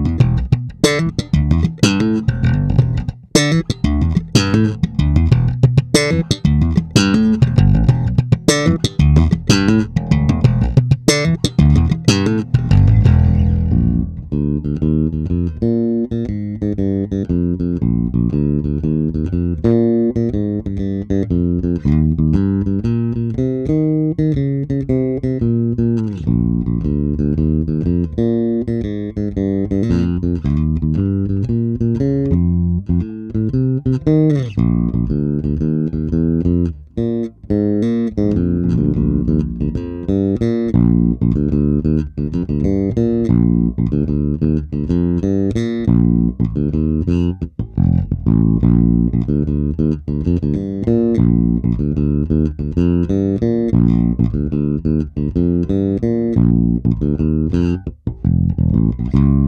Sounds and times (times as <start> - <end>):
Music: 0.0 - 59.4.